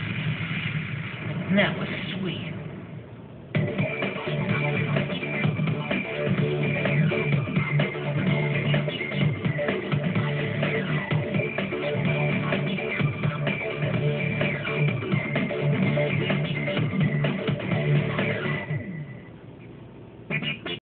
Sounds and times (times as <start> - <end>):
Music: 3.5 - 19.3, 20.2 - 20.8.